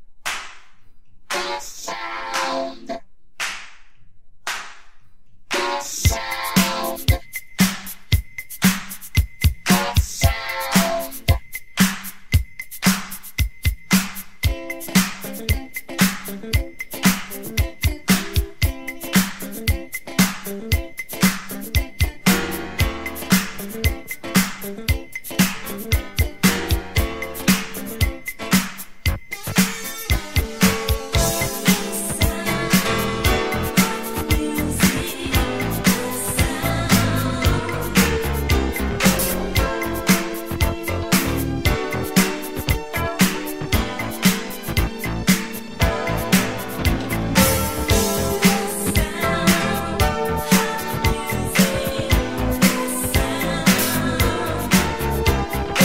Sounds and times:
Music: 1.3s - 3.1s, 5.5s - 55.8s.

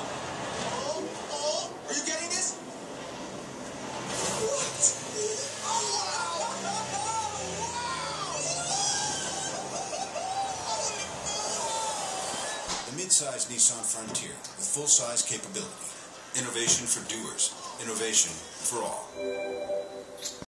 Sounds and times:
Speech: 12.9s - 19.1s
Music: 19.2s - 20.4s.

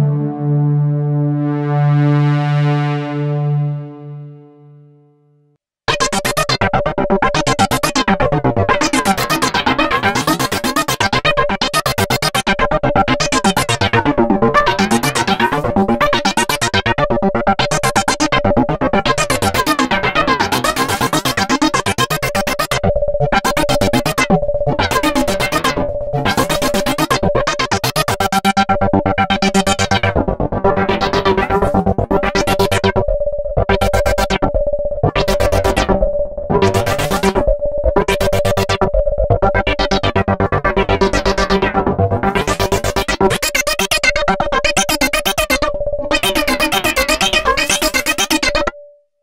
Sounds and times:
Synthesizer: 0.0s - 5.1s, 5.9s - 48.8s.

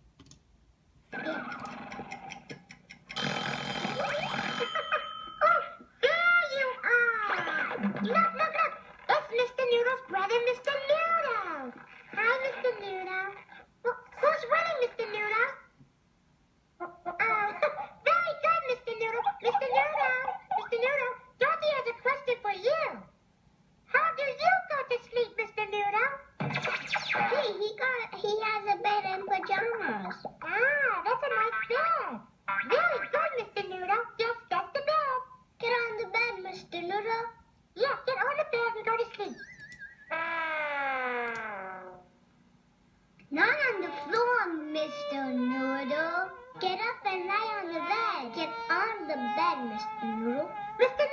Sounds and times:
Speech: 5.4s - 15.7s, 16.8s - 23.1s, 23.9s - 26.3s, 27.2s - 39.4s, 43.3s - 51.1s.

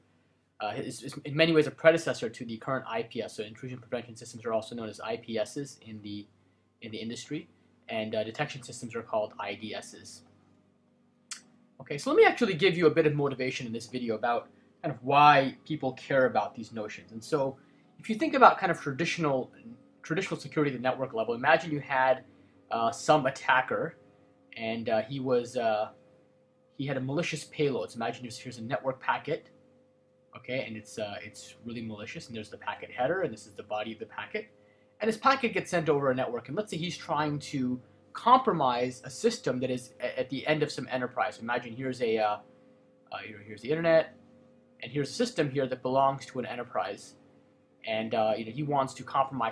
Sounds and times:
Speech: 0.6s - 10.2s, 11.8s - 24.0s, 24.6s - 25.9s, 26.8s - 29.4s, 30.4s - 42.4s, 43.2s - 44.1s, 44.8s - 47.2s, 47.9s - 49.5s.

